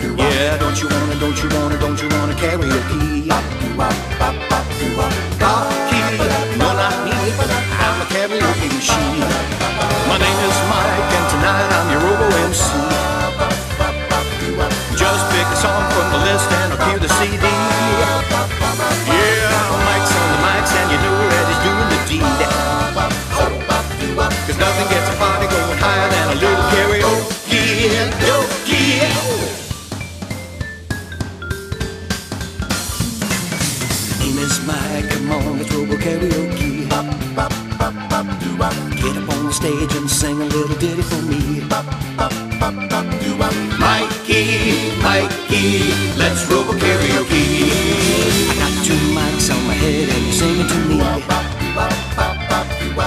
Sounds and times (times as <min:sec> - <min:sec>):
Music: 0:00.0 - 0:53.0.